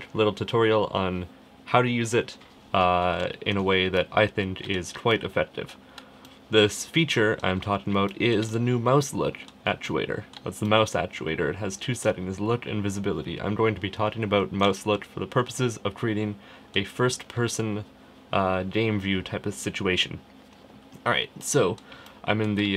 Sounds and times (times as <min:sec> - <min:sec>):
Speech: 0:00.0 - 0:05.8, 0:06.5 - 0:20.3, 0:21.0 - 0:22.7.